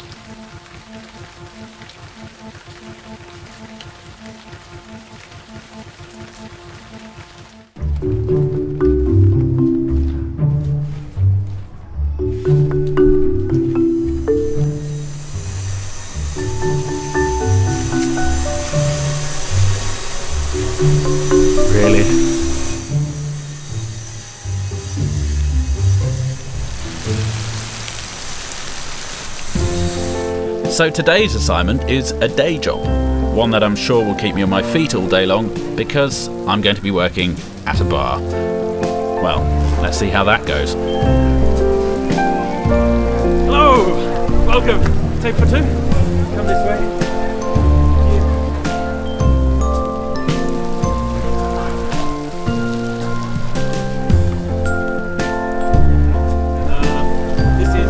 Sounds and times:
Rain on surface: 0.0 - 11.7, 12.4 - 57.8.

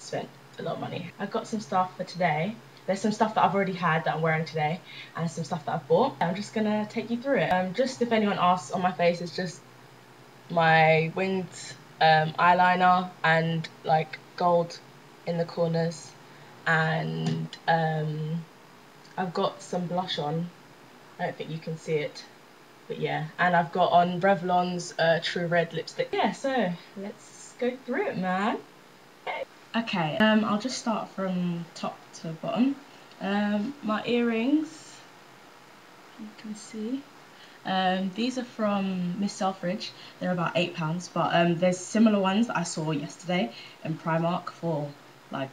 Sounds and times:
Speech: 0.0 - 9.6, 10.5 - 18.5, 19.1 - 20.5, 21.2 - 22.3, 22.9 - 28.6, 29.3 - 35.1, 36.2 - 45.5.

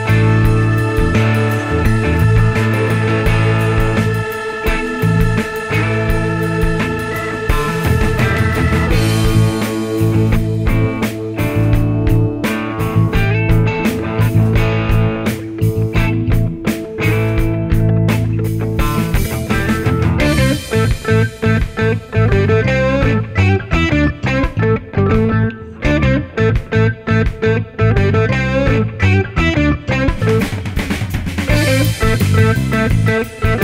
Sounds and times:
Music: 0.0 - 33.6.

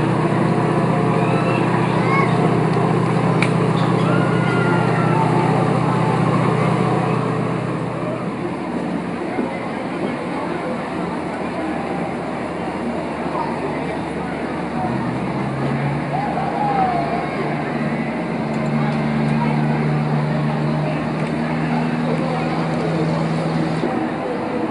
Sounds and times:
Speech: 0.0 - 24.7.

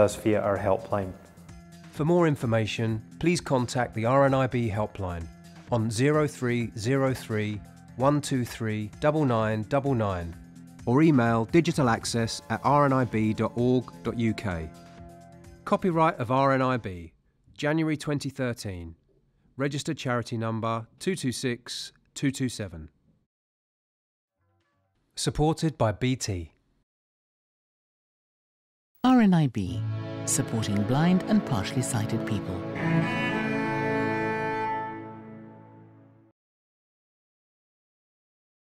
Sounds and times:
Speech: 0.0 - 1.2, 2.0 - 14.7, 15.7 - 19.0, 19.6 - 22.9, 25.2 - 26.6, 29.1 - 32.6
Cello: 30.3 - 35.2.

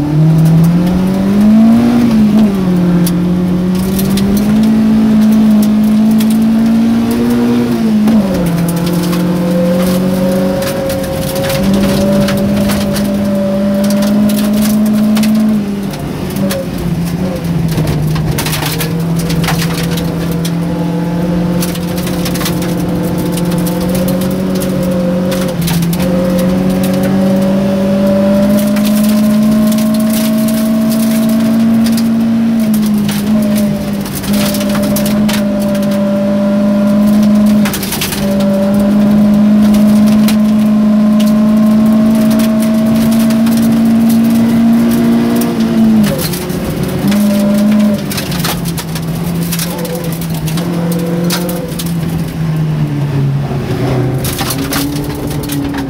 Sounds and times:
Car: 0.0 - 55.8.

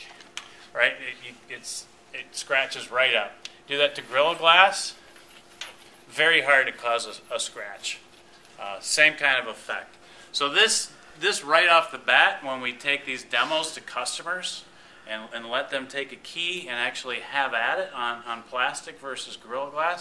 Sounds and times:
Speech: 0.8 - 5.0, 6.1 - 8.0, 8.6 - 20.0.

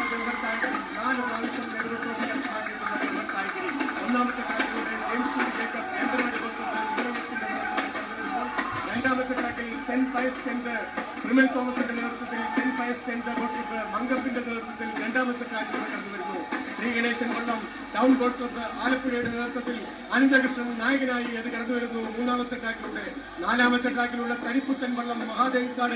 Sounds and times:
Speech: 0.0 - 25.9.

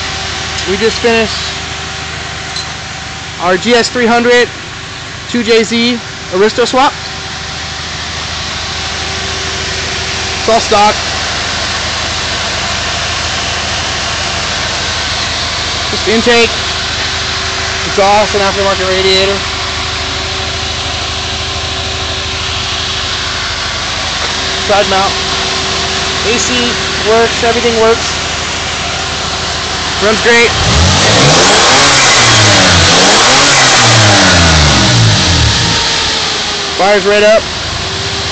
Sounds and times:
Engine: 0.0 - 38.3.

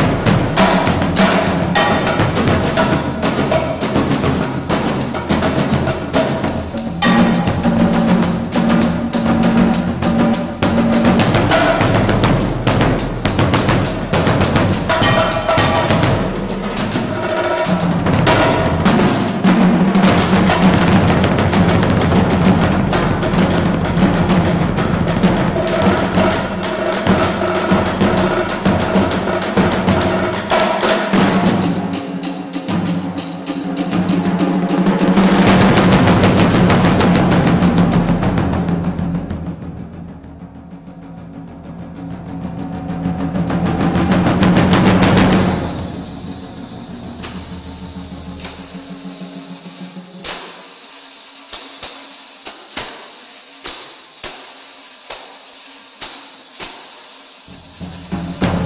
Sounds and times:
Marimba, xylophone: 1.2 - 18.1.

